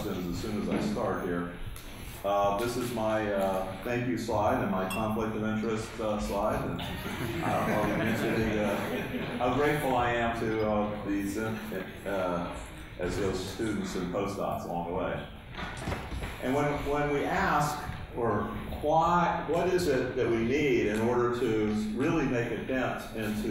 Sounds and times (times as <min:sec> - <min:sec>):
Speech: 0:00.0 - 0:01.6, 0:02.2 - 0:15.3, 0:16.4 - 0:23.5.